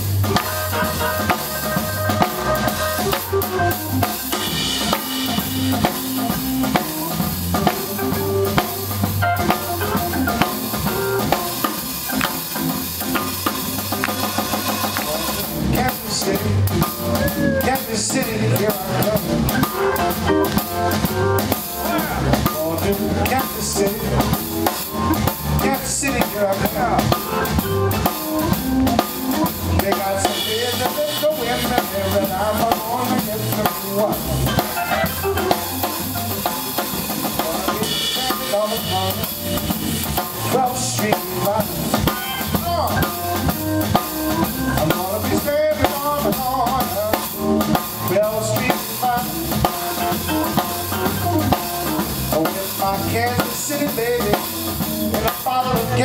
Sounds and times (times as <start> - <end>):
Music: 0.0 - 56.0.